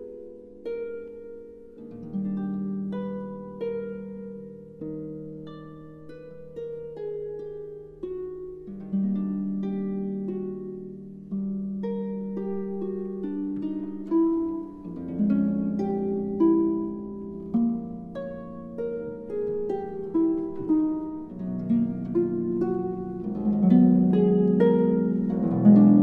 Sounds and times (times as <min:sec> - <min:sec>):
Harp: 0:00.0 - 0:26.0
Pizzicato: 0:00.0 - 0:26.0.